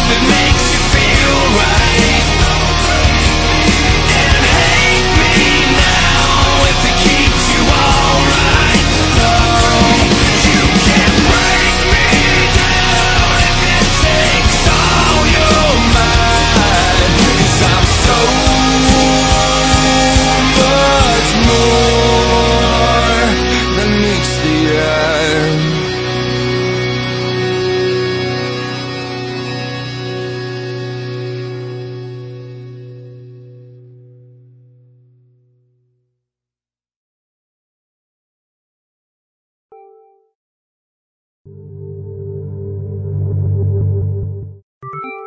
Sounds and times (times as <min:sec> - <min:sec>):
Music: 0:00.0 - 0:36.2, 0:41.5 - 0:45.2.